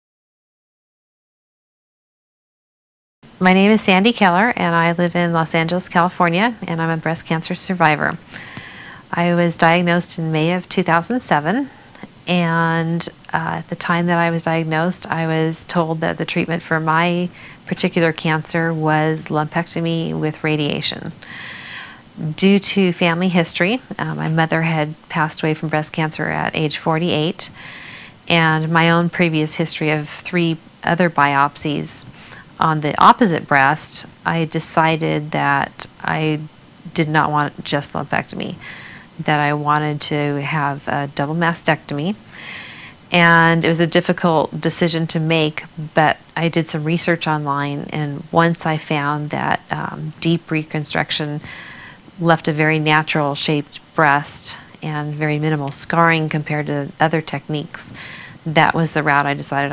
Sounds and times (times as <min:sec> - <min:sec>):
Speech: 0:03.4 - 0:08.2, 0:09.1 - 0:21.2, 0:22.2 - 0:27.6, 0:28.3 - 0:38.6, 0:39.2 - 0:42.2, 0:43.1 - 0:51.5, 0:52.2 - 0:59.7.